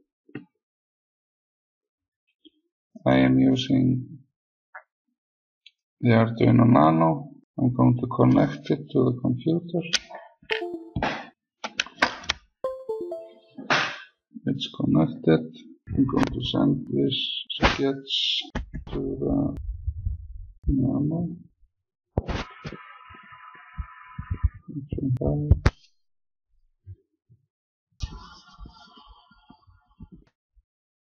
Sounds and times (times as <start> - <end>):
Speech: 3.1 - 4.2, 6.0 - 10.8, 14.5 - 19.6, 20.7 - 21.4, 24.5 - 25.7.